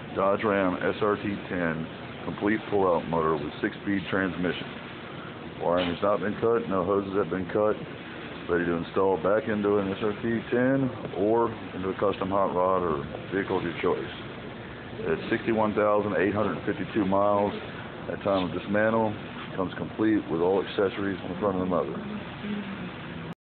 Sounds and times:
Speech: 0:00.2 - 0:04.7, 0:05.6 - 0:07.9, 0:08.5 - 0:14.2, 0:15.0 - 0:22.8.

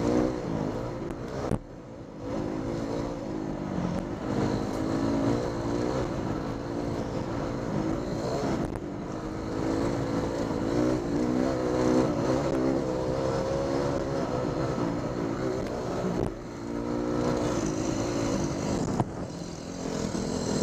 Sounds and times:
Accelerating, revving, vroom: 0:00.0 - 0:01.6, 0:02.2 - 0:20.6
Medium engine (mid frequency): 0:00.0 - 0:20.6
Vehicle: 0:00.0 - 0:20.6.

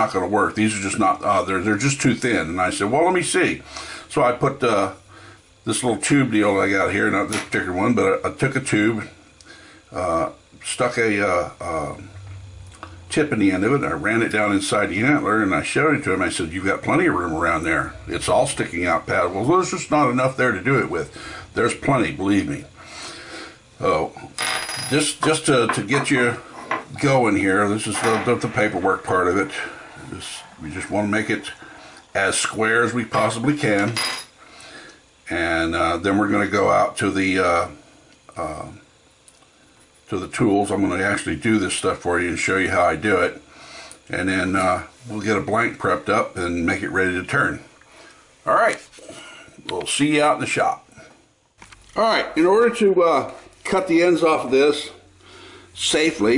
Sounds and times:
Speech: 0:00.0 - 0:05.0, 0:05.6 - 0:09.2, 0:09.9 - 0:12.1, 0:13.1 - 0:22.7, 0:23.8 - 0:34.0, 0:35.2 - 0:38.8, 0:40.1 - 0:43.4, 0:44.1 - 0:47.7, 0:48.4 - 0:48.9, 0:49.6 - 0:50.9, 0:52.0 - 0:55.0, 0:55.8 - 0:56.3.

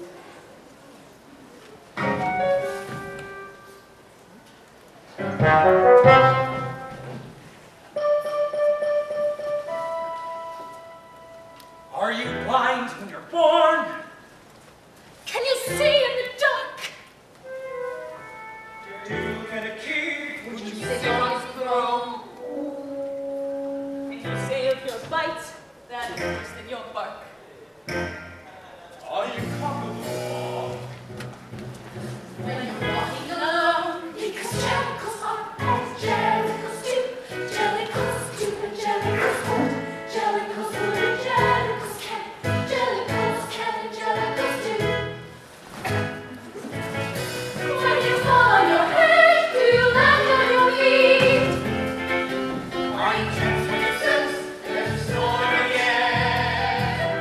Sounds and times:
Music: 0:02.0 - 0:03.9, 0:05.2 - 0:12.7, 0:15.6 - 0:16.2, 0:17.4 - 0:25.4, 0:26.0 - 0:27.2, 0:27.9 - 0:57.2.

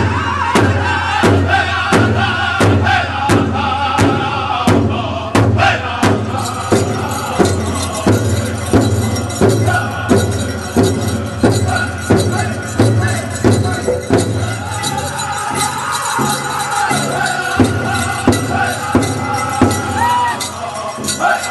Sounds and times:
Music: 0:00.0 - 0:21.5.

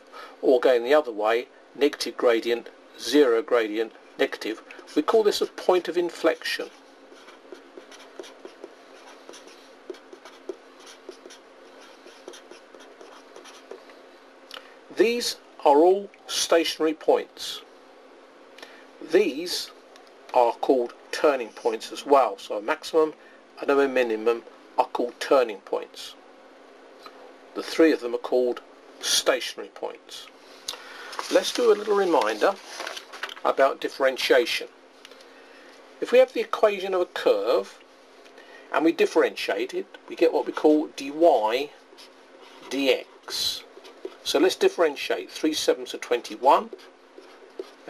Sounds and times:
Inside, small room: 0:00.0 - 0:47.9
Speech: 0:00.4 - 0:06.8, 0:14.9 - 0:17.7, 0:19.0 - 0:26.2, 0:27.6 - 0:30.3, 0:31.3 - 0:32.6, 0:33.4 - 0:34.7, 0:36.0 - 0:37.8, 0:38.7 - 0:41.8, 0:42.7 - 0:46.8
Writing: 0:04.8 - 0:13.9, 0:46.1 - 0:47.9.

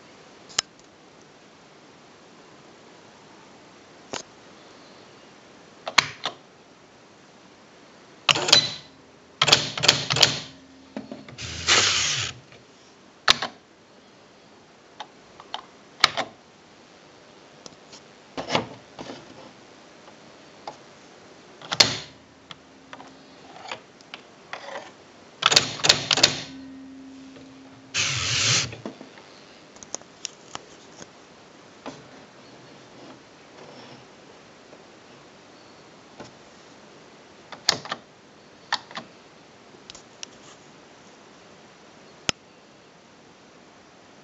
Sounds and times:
Typewriter: 0:08.3 - 0:10.6, 0:11.4 - 0:12.4, 0:21.7 - 0:22.1, 0:25.4 - 0:26.6, 0:28.0 - 0:28.8.

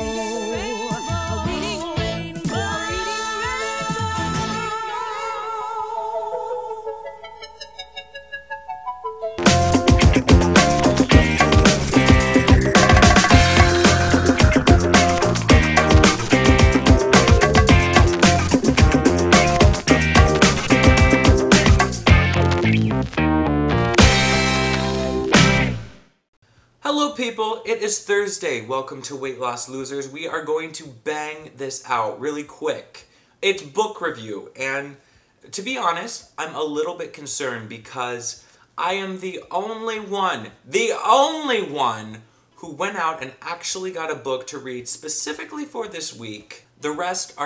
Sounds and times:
Speech: 0:26.8 - 0:47.4.

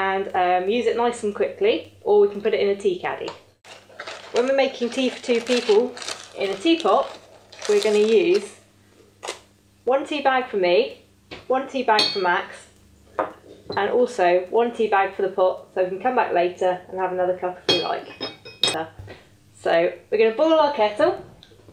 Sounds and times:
Speech: 0:00.0 - 0:03.4, 0:04.4 - 0:08.6, 0:09.9 - 0:12.7, 0:13.7 - 0:18.1, 0:19.6 - 0:21.3.

